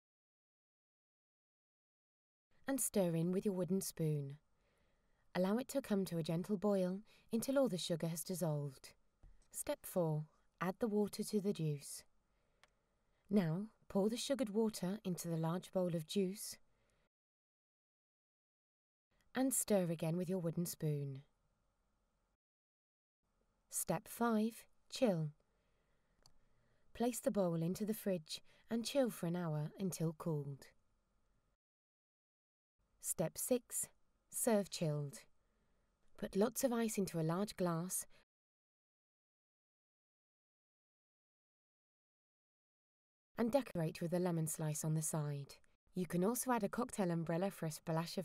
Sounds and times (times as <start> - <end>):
Speech: 2.7 - 4.4, 5.4 - 8.9, 9.6 - 12.1, 13.3 - 16.6, 19.4 - 21.2, 23.8 - 25.4, 27.0 - 30.7, 33.0 - 35.2, 36.2 - 38.1, 43.4 - 48.2.